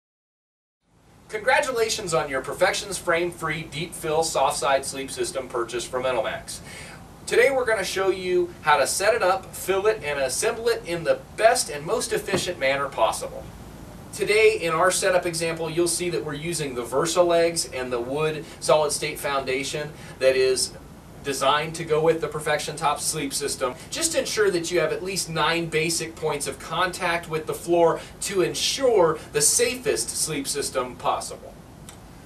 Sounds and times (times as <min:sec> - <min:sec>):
Speech: 0:01.3 - 0:06.7, 0:07.3 - 0:13.5, 0:14.2 - 0:31.6.